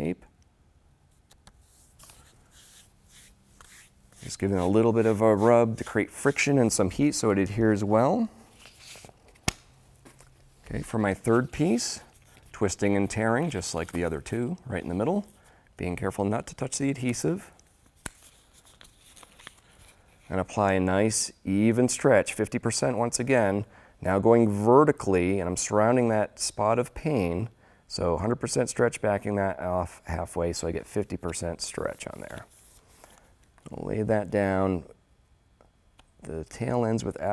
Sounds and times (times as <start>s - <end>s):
Speech: 0.0s - 0.3s, 4.2s - 8.4s, 10.7s - 17.5s, 20.3s - 32.5s, 33.6s - 35.0s, 36.2s - 37.3s
Inside, small room: 0.0s - 37.3s.